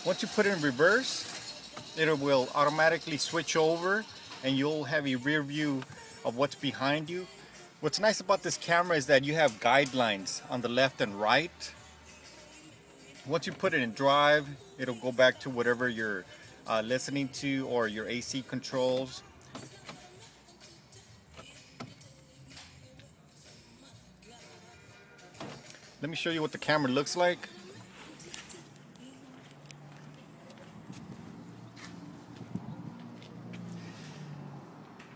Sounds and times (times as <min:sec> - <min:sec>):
Speech: 0:00.0 - 0:01.2, 0:02.0 - 0:11.7, 0:13.3 - 0:19.2, 0:26.0 - 0:27.5
Music: 0:00.0 - 0:32.9.